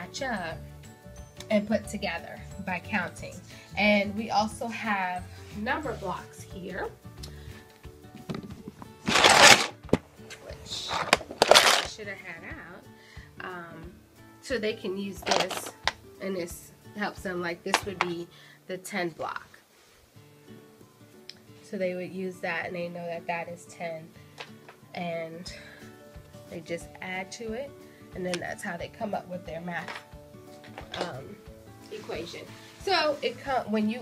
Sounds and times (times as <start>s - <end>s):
Speech: 0.0s - 0.6s, 1.4s - 7.0s, 10.3s - 11.1s, 11.7s - 19.6s, 21.7s - 24.1s, 25.0s - 25.6s, 26.5s - 30.0s, 30.9s - 34.0s
Music: 0.0s - 34.0s.